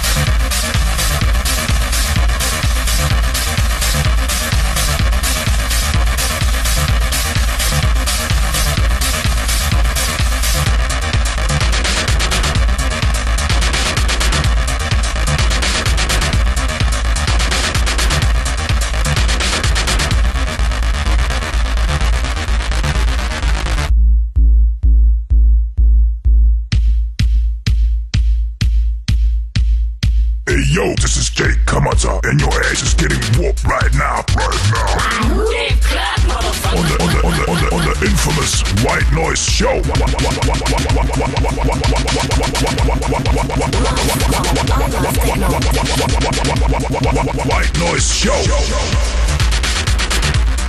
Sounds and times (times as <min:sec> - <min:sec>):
Dubstep: 0:00.0 - 0:23.9, 0:30.5 - 0:50.6
Speech: 0:30.5 - 0:36.0, 0:36.6 - 0:40.1, 0:47.5 - 0:49.0.